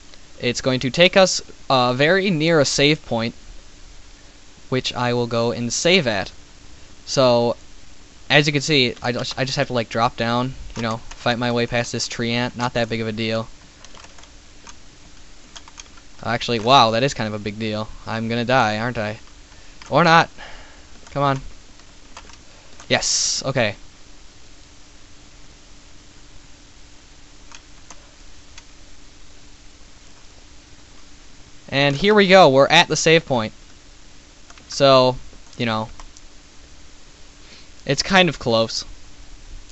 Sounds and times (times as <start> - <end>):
Speech: 0.4 - 3.4, 4.7 - 6.3, 7.1 - 7.6, 8.3 - 13.5, 16.2 - 19.2, 19.9 - 20.3, 21.2 - 21.4, 22.9 - 23.8, 31.7 - 33.6, 34.7 - 35.9, 37.9 - 38.9.